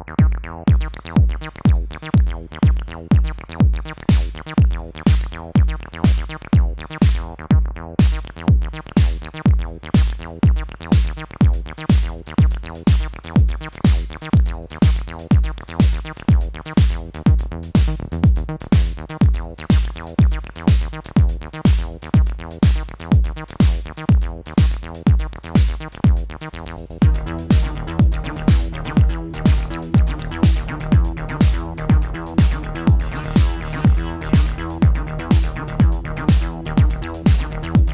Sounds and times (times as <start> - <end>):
Drum machine: 0.0 - 37.9.